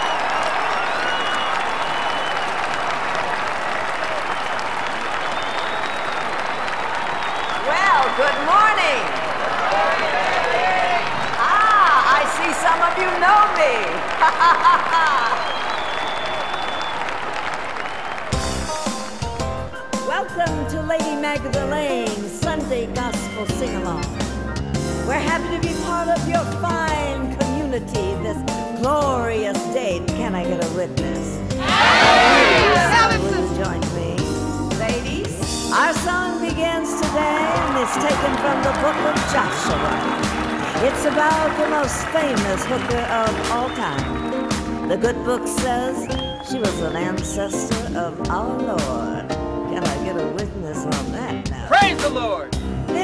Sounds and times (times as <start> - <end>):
Music: 3.4 - 14.1, 17.0 - 53.0.